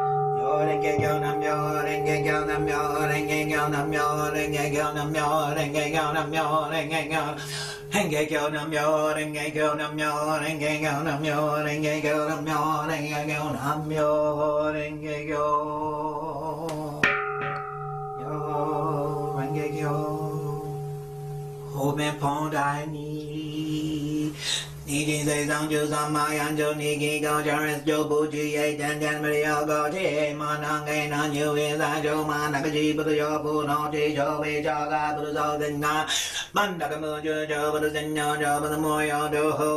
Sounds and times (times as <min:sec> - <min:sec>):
Mantra: 0:00.0 - 0:39.7.